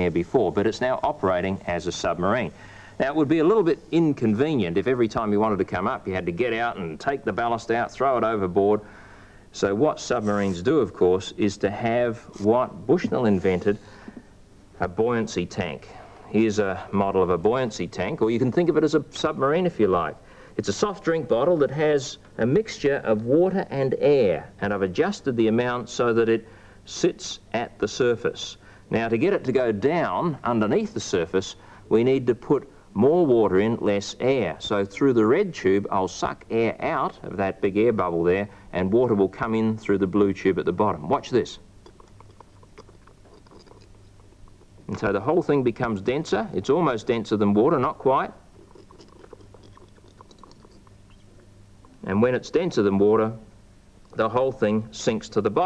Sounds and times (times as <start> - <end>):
Speech: 0.0 - 8.8, 9.5 - 13.8, 14.8 - 41.6, 44.9 - 48.4, 52.0 - 53.5, 54.2 - 55.6
Inside, small room: 0.0 - 55.6.